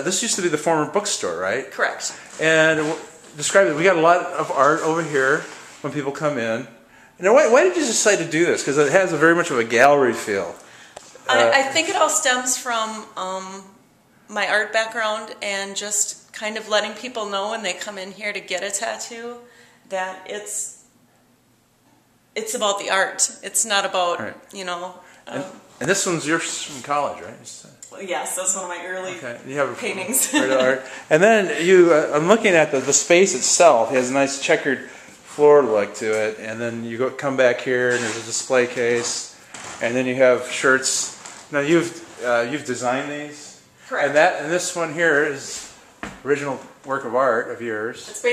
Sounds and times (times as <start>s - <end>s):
Speech: 0.0s - 10.6s, 11.3s - 13.6s, 22.4s - 45.7s
Inside, small room: 0.0s - 48.3s.